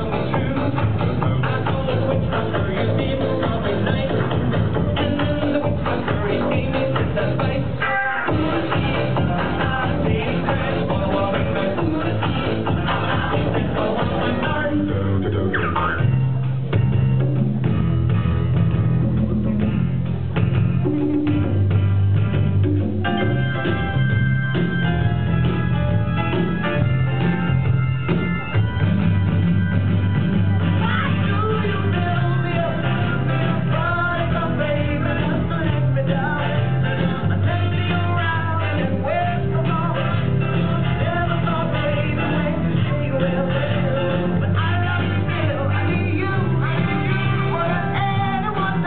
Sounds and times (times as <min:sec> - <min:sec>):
Singing: 0:00.0 - 0:15.8, 0:30.6 - 0:48.8
Music: 0:00.0 - 0:48.8.